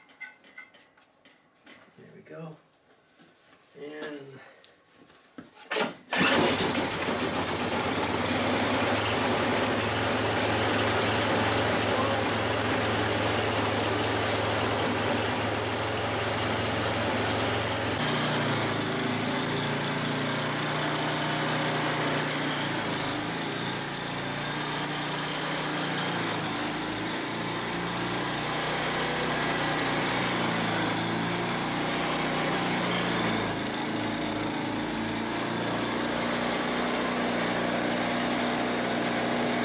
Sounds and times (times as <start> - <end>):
Engine: 5.7 - 39.6.